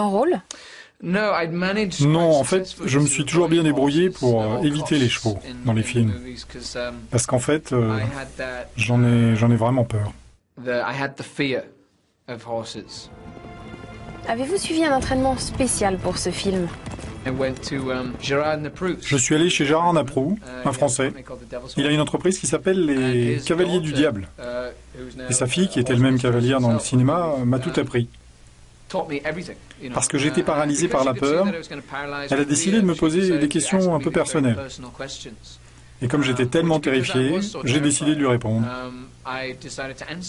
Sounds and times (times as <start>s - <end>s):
Speech: 0.0s - 13.1s, 17.3s - 28.2s, 28.9s - 40.2s.